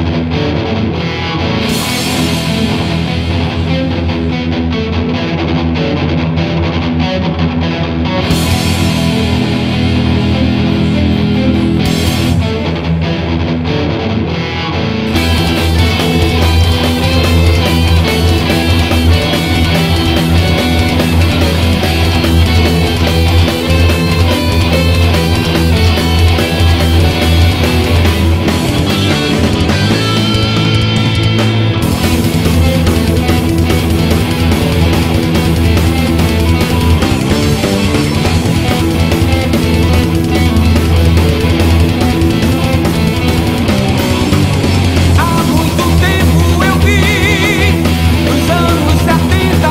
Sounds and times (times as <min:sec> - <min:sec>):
Heavy metal: 0:00.0 - 0:49.7.